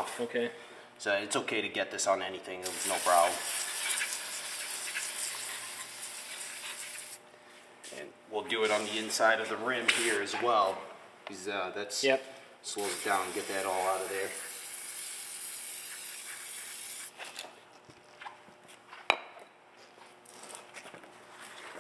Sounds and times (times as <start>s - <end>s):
Speech: 0.0s - 3.4s, 7.9s - 14.4s.